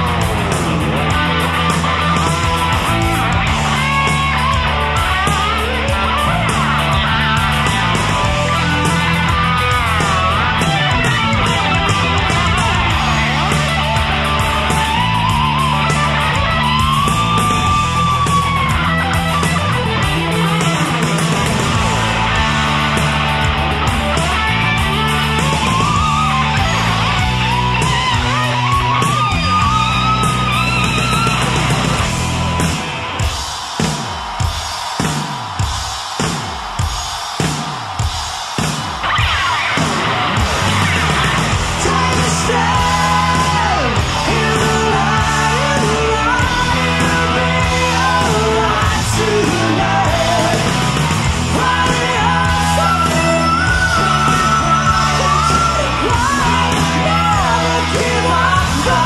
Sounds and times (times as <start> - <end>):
Music: 0.0 - 59.0.